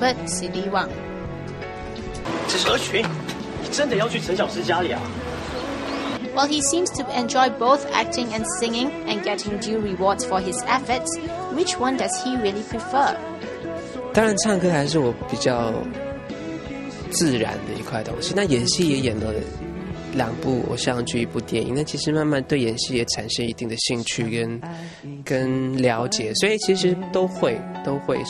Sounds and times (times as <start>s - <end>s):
Music: 0.0s - 28.2s
Male singing: 4.8s - 21.2s, 23.5s - 28.2s.